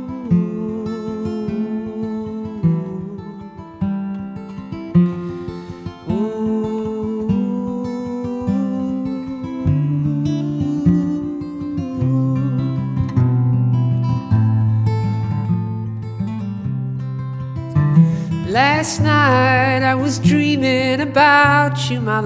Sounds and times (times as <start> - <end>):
Singing: 0.0 - 3.5, 6.1 - 13.1
Acoustic guitar: 0.0 - 22.2.